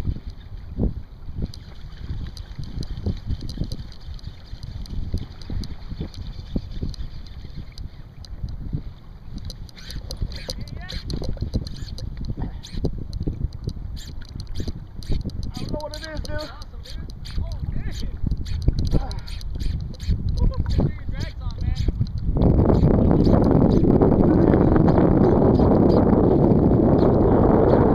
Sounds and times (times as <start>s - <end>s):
Boat, Water vehicle: 0.0s - 27.9s.